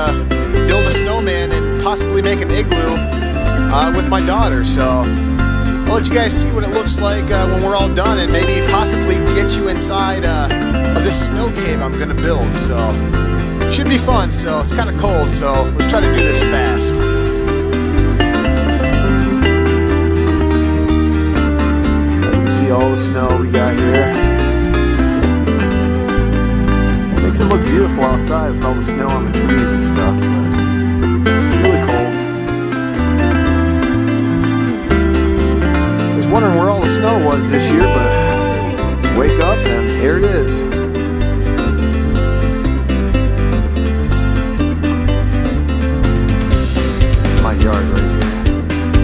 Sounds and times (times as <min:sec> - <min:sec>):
Speech: 0:00.0 - 0:03.0, 0:03.7 - 0:05.1, 0:05.9 - 0:13.0, 0:13.7 - 0:17.1, 0:22.3 - 0:24.2, 0:27.2 - 0:30.2, 0:31.5 - 0:32.2, 0:36.2 - 0:38.5, 0:39.1 - 0:40.7, 0:47.2 - 0:48.3
Music: 0:00.0 - 0:49.0.